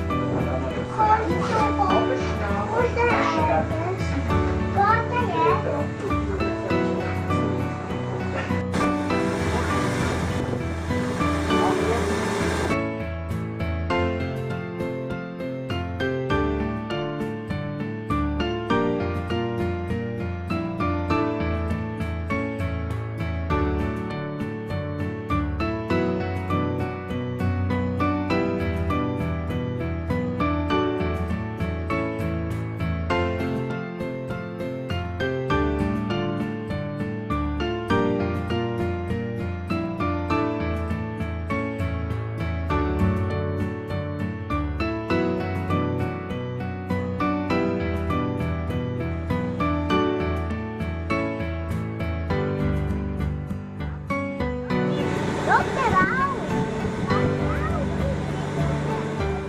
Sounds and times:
Music: 0.0s - 59.4s
Hiss: 8.8s - 12.7s.

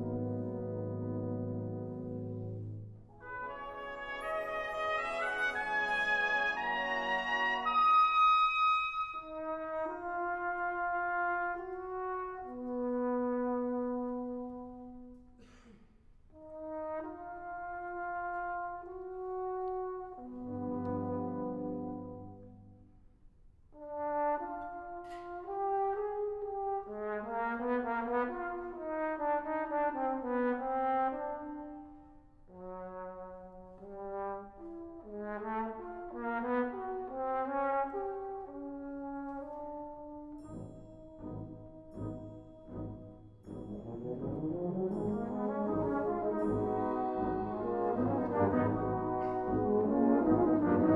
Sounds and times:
Trombone: 0.0s - 15.3s, 16.3s - 22.8s, 23.7s - 50.9s.

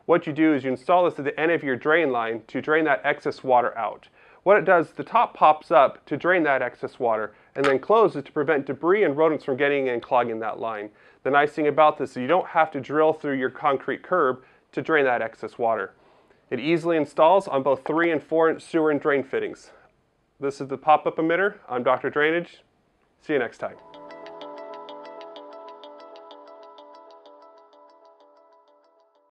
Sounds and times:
Speech: 0.1s - 19.8s, 20.4s - 23.8s
Music: 23.8s - 29.3s.

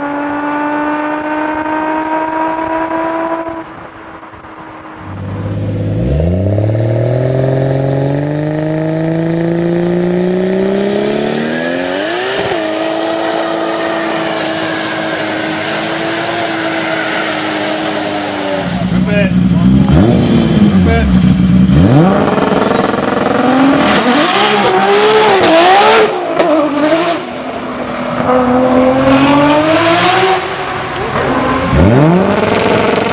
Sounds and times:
Speech: 19.0s - 20.2s, 20.8s - 21.2s.

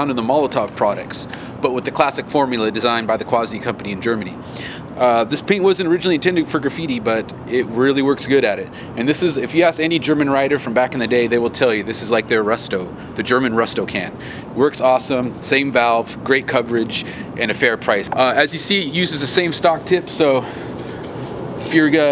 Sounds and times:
Speech: 0.0s - 4.4s, 5.0s - 20.5s, 21.6s - 22.1s.

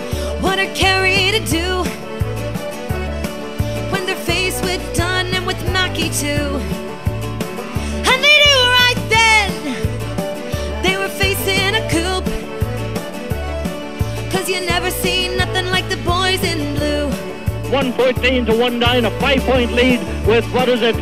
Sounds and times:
Music: 0.0s - 21.0s.

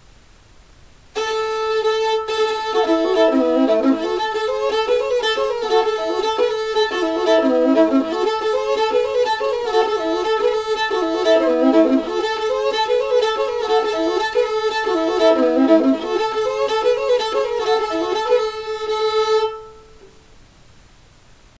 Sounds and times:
Music: 1.2s - 20.1s.

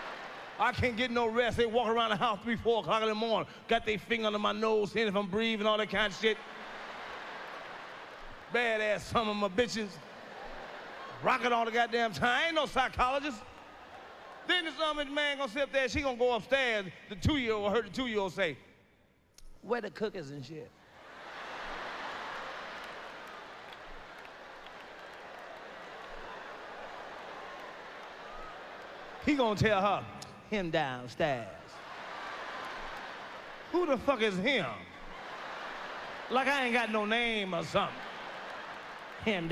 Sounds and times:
Speech: 0.6s - 6.4s, 8.5s - 10.0s, 11.2s - 13.5s, 14.5s - 18.6s, 19.6s - 20.7s, 29.2s - 31.8s, 33.8s - 34.9s, 36.3s - 38.0s, 39.2s - 39.5s.

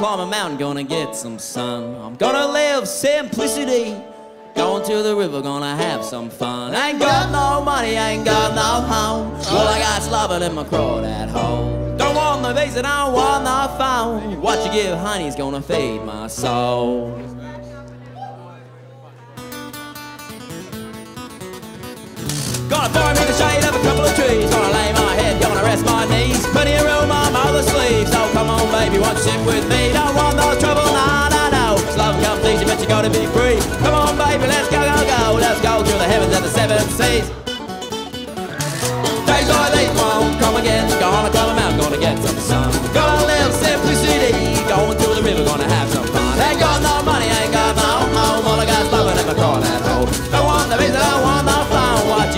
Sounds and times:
Music: 0.0s - 52.3s.

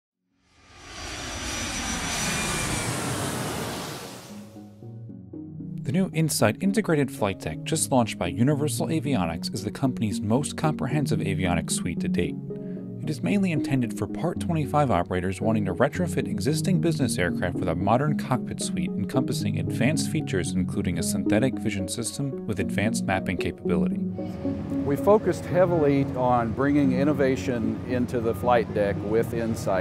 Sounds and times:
Fixed-wing aircraft, airplane: 0.5s - 4.6s.

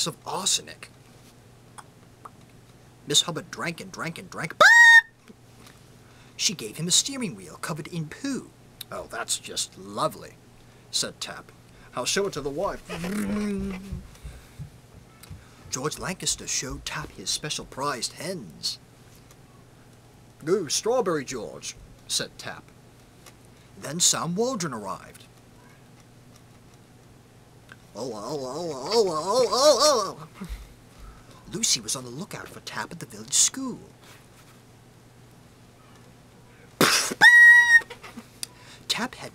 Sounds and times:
Male speech, man speaking: 0.0s - 0.9s, 3.1s - 4.6s, 6.4s - 13.8s, 15.7s - 18.8s, 20.4s - 22.7s, 23.8s - 25.3s, 28.0s - 29.5s, 31.5s - 34.0s, 38.9s - 39.3s.

